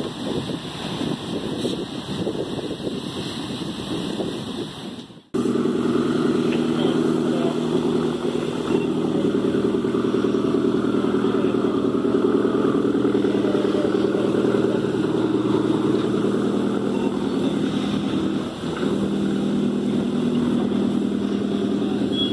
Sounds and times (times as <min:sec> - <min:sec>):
Motorboat, speedboat: 0:00.0 - 0:22.3
Wind noise (microphone): 0:00.0 - 0:22.3.